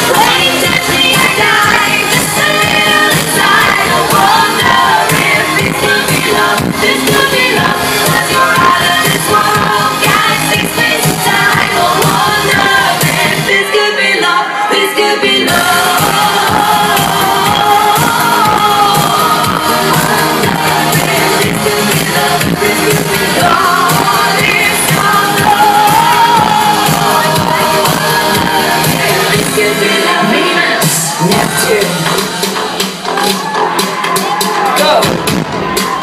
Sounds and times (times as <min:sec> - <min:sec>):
Female singing: 0:00.0 - 0:32.2
Music: 0:00.0 - 0:36.0.